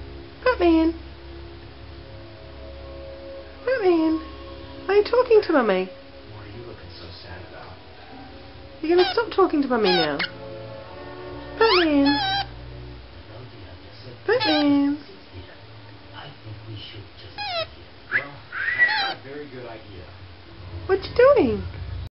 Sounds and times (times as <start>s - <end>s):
Speech: 4.9s - 7.8s, 8.8s - 10.3s, 13.3s - 15.6s, 16.2s - 20.2s.